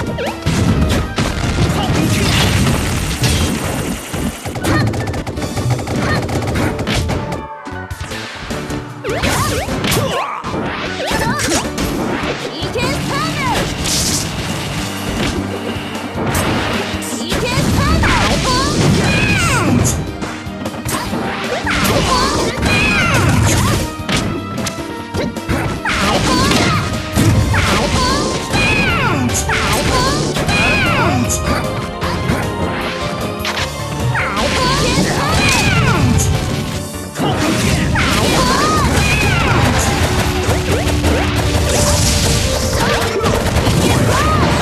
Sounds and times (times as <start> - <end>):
Smash, crash: 0.0 - 7.3, 9.1 - 44.6
Music: 0.0 - 44.6.